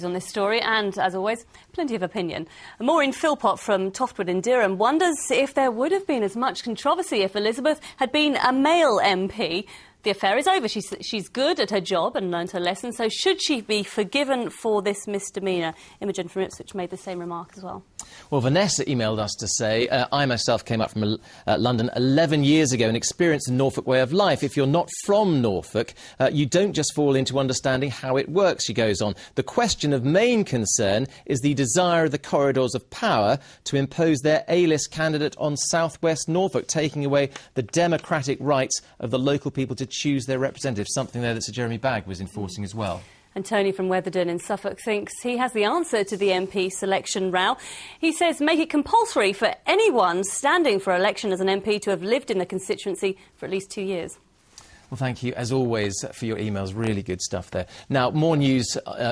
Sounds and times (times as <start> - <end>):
Speech: 0.0 - 54.2, 54.9 - 59.1.